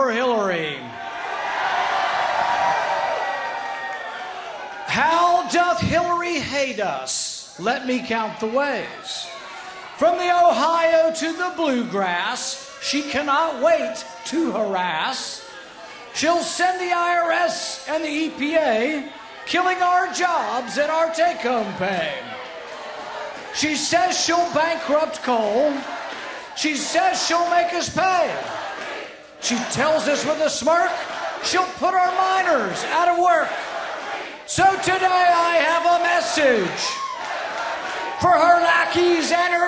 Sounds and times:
Male speech, man speaking: 0:00.0 - 0:01.0, 0:04.9 - 0:09.4, 0:10.0 - 0:15.5, 0:16.2 - 0:22.4, 0:23.6 - 0:25.8, 0:26.6 - 0:28.4, 0:29.4 - 0:33.6, 0:34.5 - 0:37.0, 0:38.2 - 0:39.6
Narration, monologue: 0:04.9 - 0:09.3, 0:23.6 - 0:25.8, 0:26.6 - 0:28.4, 0:29.4 - 0:33.5, 0:34.4 - 0:37.0.

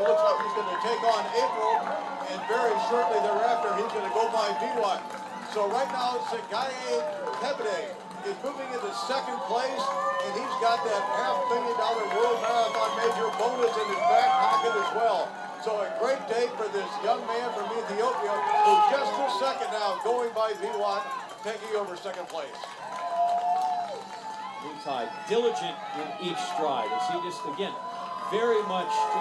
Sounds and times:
Speech: 0:00.0 - 0:22.5
Outside, urban or manmade: 0:00.0 - 0:29.2.

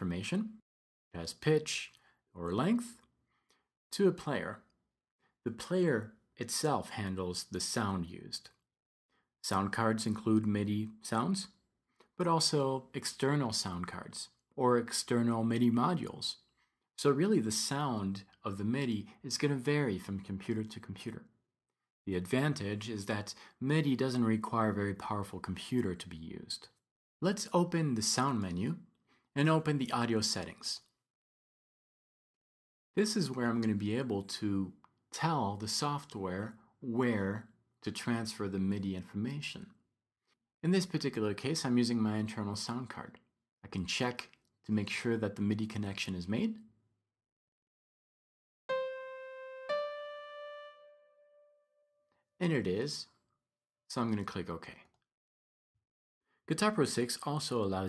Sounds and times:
Speech: 0:00.0 - 0:00.6, 0:01.2 - 0:03.1, 0:03.9 - 0:04.7, 0:05.5 - 0:08.6, 0:09.4 - 0:11.6, 0:12.2 - 0:16.4, 0:17.0 - 0:21.3, 0:22.1 - 0:28.8, 0:29.4 - 0:30.9, 0:33.0 - 0:39.8, 0:40.6 - 0:46.6, 0:52.4 - 0:53.2, 0:53.9 - 0:55.0, 0:56.5 - 0:57.8.

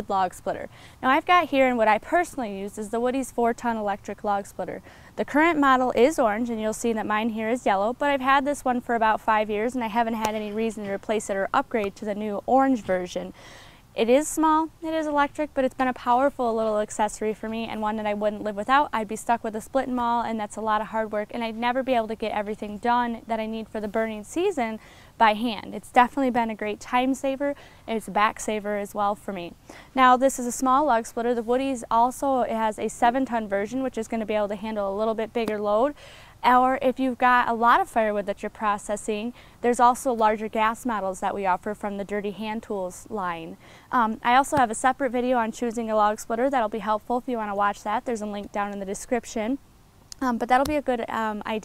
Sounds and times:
Speech: 0:00.0 - 0:13.3, 0:14.0 - 0:49.6, 0:50.2 - 0:51.6.

